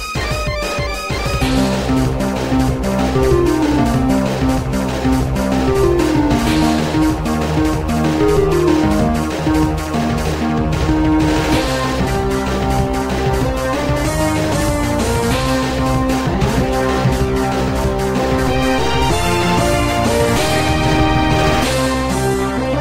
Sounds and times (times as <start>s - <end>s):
Video game music: 0.0s - 22.8s.